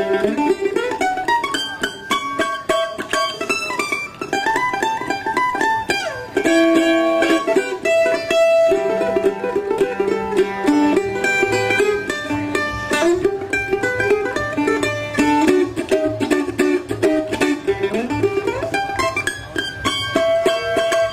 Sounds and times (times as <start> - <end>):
Folk music: 0.0 - 21.1.